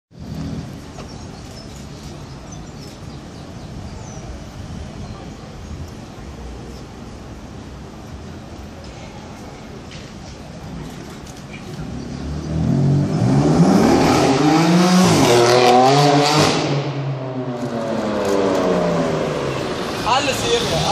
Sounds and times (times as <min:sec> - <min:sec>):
Speech: 0:20.0 - 0:20.9.